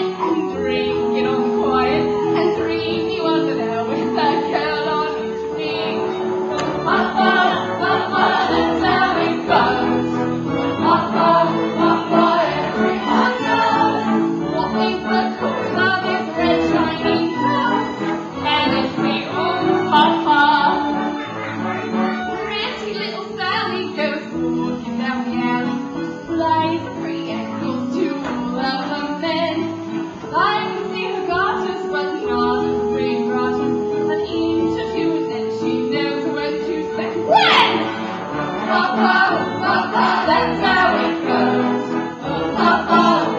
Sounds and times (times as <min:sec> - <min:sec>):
Inside, large room or hall: 0:00.0 - 0:43.3
Music: 0:00.0 - 0:43.3.